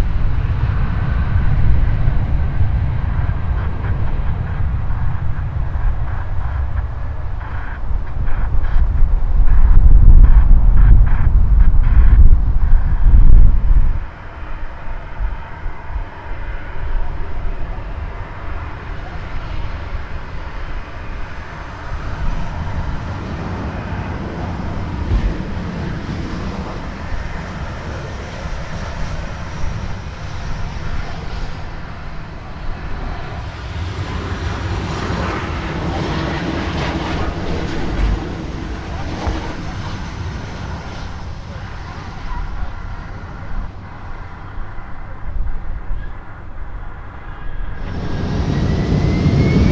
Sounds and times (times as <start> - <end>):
Aircraft: 0.0 - 49.7
Outside, urban or manmade: 0.0 - 49.7.